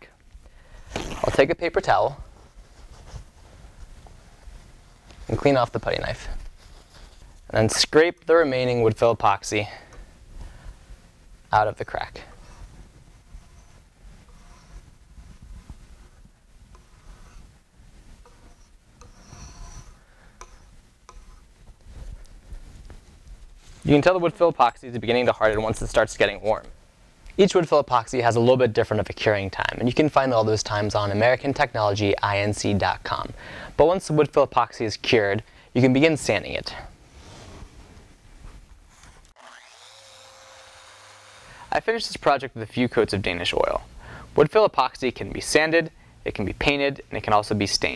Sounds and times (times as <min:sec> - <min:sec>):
Speech: 0:01.2 - 0:02.2, 0:05.3 - 0:06.4, 0:07.5 - 0:09.9, 0:11.5 - 0:12.3, 0:23.8 - 0:26.7, 0:27.4 - 0:37.0, 0:41.7 - 0:47.9.